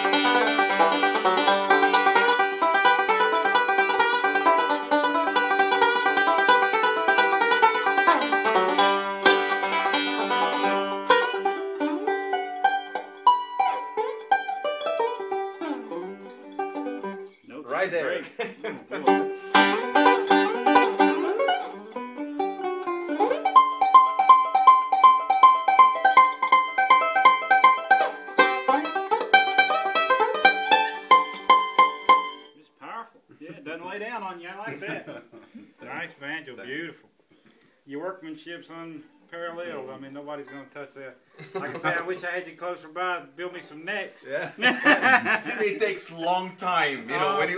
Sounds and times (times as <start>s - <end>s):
Banjo: 0.0s - 32.6s, 46.8s - 47.5s
Mandolin: 0.0s - 32.6s, 46.8s - 47.5s
Bluegrass: 0.0s - 47.5s
Speech: 17.5s - 18.3s, 32.6s - 35.1s, 35.8s - 37.1s, 37.9s - 44.6s, 45.4s - 47.5s.